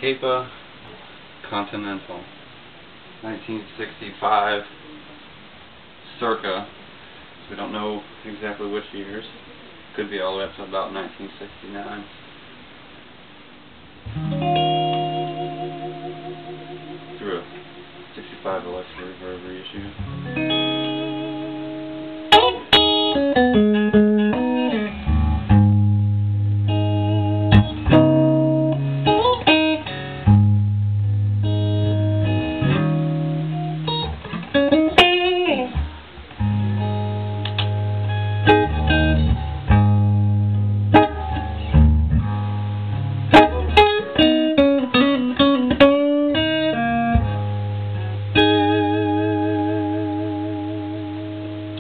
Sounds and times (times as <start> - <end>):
Electric guitar: 13.8 - 19.2, 19.8 - 51.8
Strum: 14.1 - 51.8
Acoustic guitar: 20.0 - 51.8.